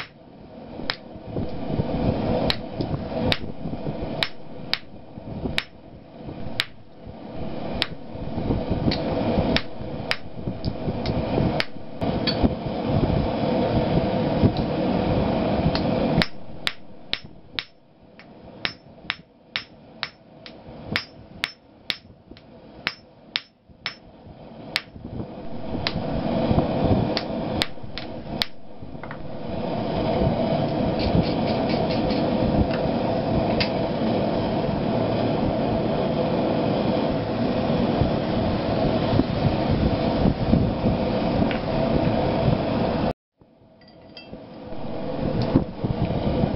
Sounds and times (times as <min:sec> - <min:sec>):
Hammer: 0:18.6 - 0:20.2, 0:21.0 - 0:22.1, 0:22.9 - 0:24.0.